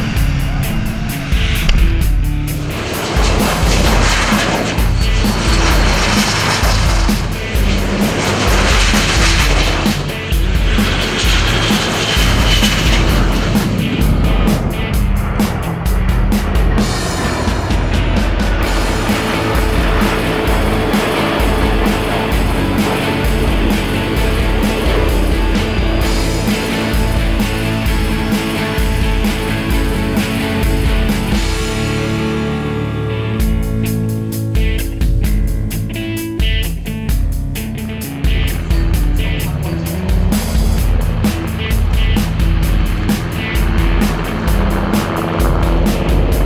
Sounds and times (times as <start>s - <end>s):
Fixed-wing aircraft, airplane: 0.0s - 46.4s
Music: 0.0s - 46.4s.